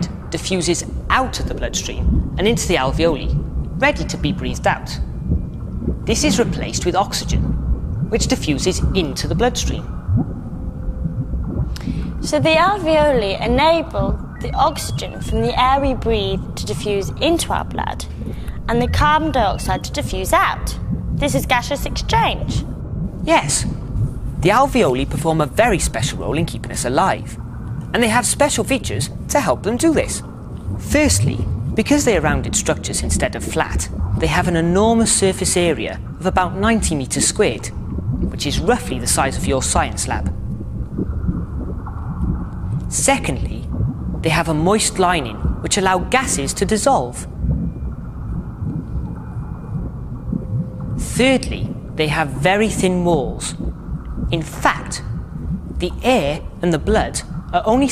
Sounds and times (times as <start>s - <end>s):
Speech: 0.0s - 5.0s, 6.1s - 7.5s, 8.1s - 9.8s, 12.2s - 18.1s, 18.7s - 22.6s, 23.3s - 23.7s, 24.4s - 27.4s, 28.0s - 30.2s, 30.9s - 37.7s, 38.4s - 40.3s, 42.9s - 43.6s, 44.2s - 47.3s, 51.0s - 53.6s, 54.3s - 55.1s, 55.8s - 57.9s.